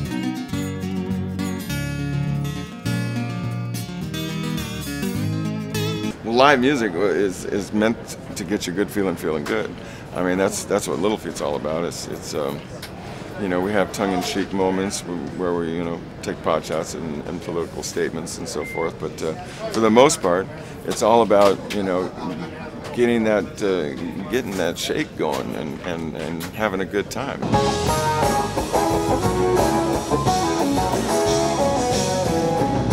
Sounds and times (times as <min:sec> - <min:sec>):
Music: 0:00.0 - 0:06.2, 0:27.4 - 0:32.9
Speech: 0:06.2 - 0:12.7, 0:13.4 - 0:27.4.